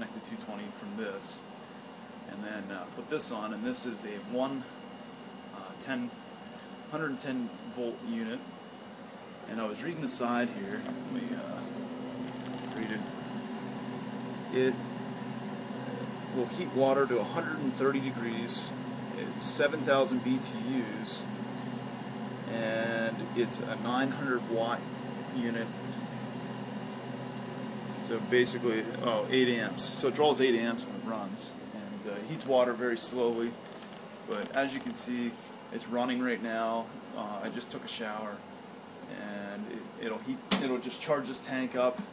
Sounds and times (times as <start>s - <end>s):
Speech: 0.0s - 1.5s, 2.3s - 4.7s, 5.6s - 6.2s, 6.9s - 8.4s, 9.5s - 11.7s, 12.7s - 13.1s, 14.5s - 14.8s, 16.4s - 21.3s, 22.5s - 25.8s, 28.0s - 33.6s, 34.3s - 38.4s, 39.1s - 42.1s.